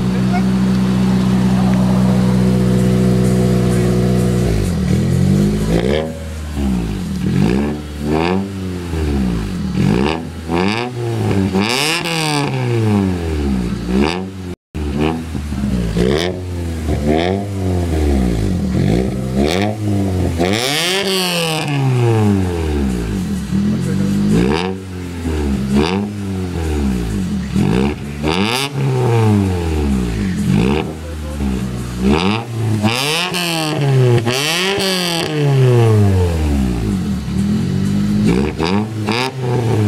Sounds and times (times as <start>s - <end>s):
Accelerating, revving, vroom: 0.0s - 39.8s
Car: 0.0s - 39.8s.